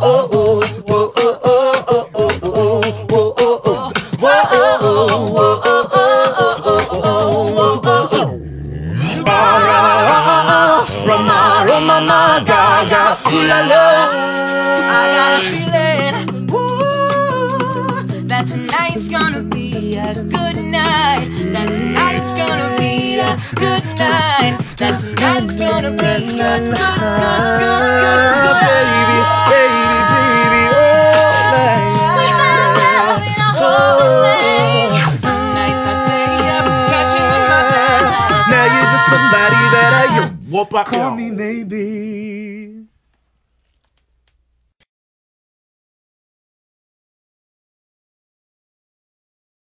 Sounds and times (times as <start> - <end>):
Music: 0.0 - 40.4.